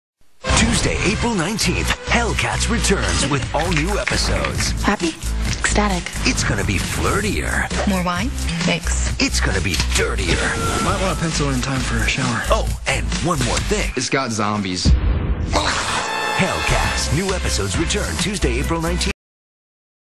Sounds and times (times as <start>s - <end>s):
Music: 0.4s - 14.7s, 15.6s - 19.2s
Speech: 6.3s - 14.9s, 16.4s - 19.2s.